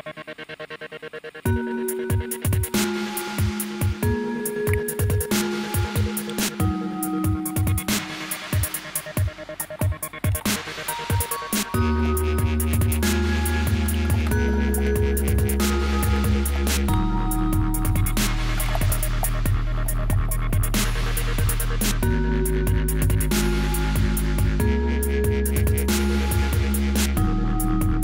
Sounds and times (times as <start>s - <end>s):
Music: 0.0s - 28.0s.